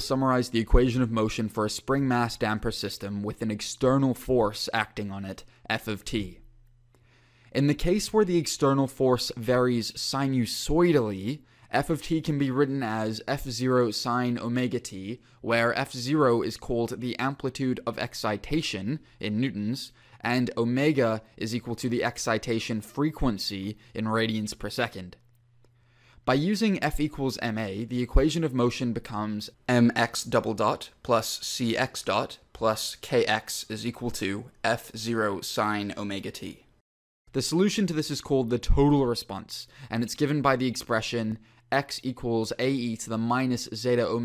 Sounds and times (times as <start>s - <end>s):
Speech: 0.0s - 6.5s, 7.5s - 25.2s, 26.2s - 36.7s, 37.3s - 44.2s.